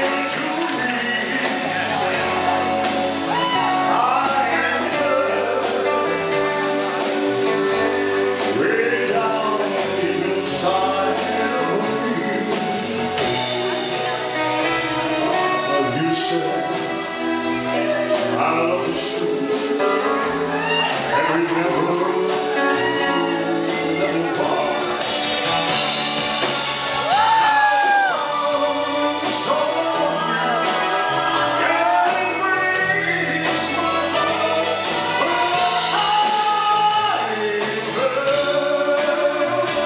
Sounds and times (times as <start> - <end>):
Male singing: 0.0 - 2.5, 3.3 - 14.1, 15.1 - 25.1, 27.2 - 39.8
Music: 0.0 - 39.8.